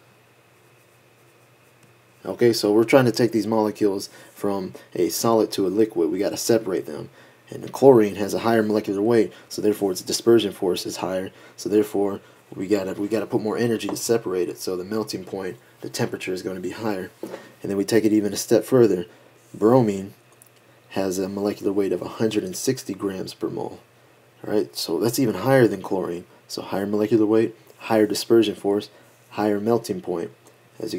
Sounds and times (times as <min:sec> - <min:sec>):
Speech: 0:02.2 - 0:20.2, 0:20.9 - 0:30.9.